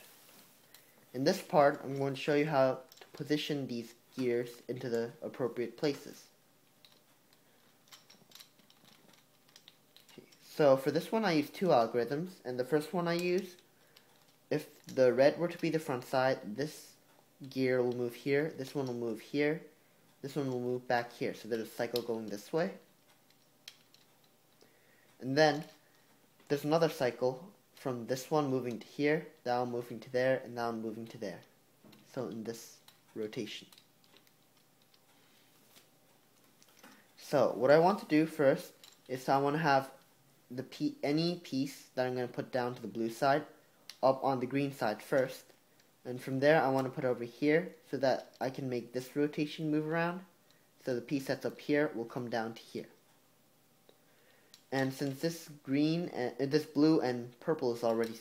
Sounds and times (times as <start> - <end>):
Speech: 1.1 - 6.3, 10.4 - 13.6, 14.5 - 22.9, 25.2 - 25.8, 26.5 - 31.5, 32.1 - 33.7, 37.2 - 45.5, 46.1 - 53.0, 54.7 - 58.2.